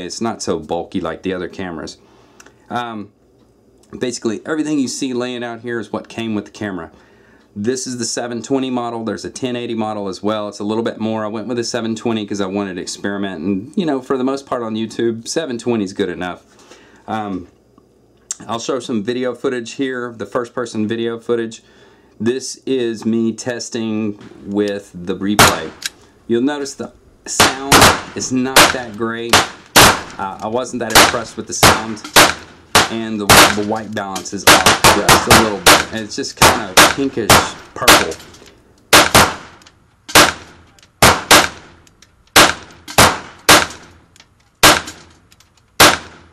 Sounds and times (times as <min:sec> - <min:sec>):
Gunshot, gunfire: 0:25.4 - 0:25.7, 0:27.4 - 0:28.8, 0:29.4 - 0:30.2, 0:30.9 - 0:33.7, 0:34.5 - 0:38.2, 0:39.0 - 0:41.8, 0:42.4 - 0:43.9, 0:44.6 - 0:45.1, 0:45.8 - 0:46.3.